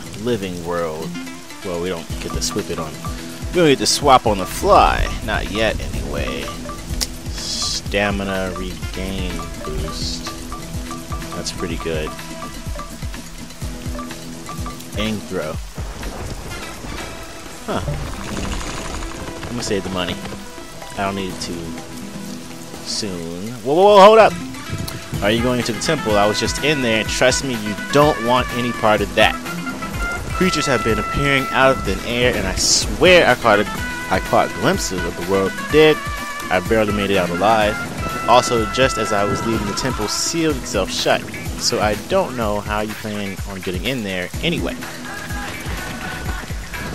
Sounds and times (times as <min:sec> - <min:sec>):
Music: 0:00.0 - 0:46.9
Rain on surface: 0:00.0 - 0:46.9
Speech: 0:00.2 - 0:03.0, 0:03.6 - 0:06.6, 0:07.3 - 0:10.3, 0:11.4 - 0:12.1, 0:15.0 - 0:15.6, 0:19.5 - 0:20.2, 0:21.0 - 0:21.7, 0:22.8 - 0:24.4, 0:25.2 - 0:29.4, 0:30.4 - 0:44.8.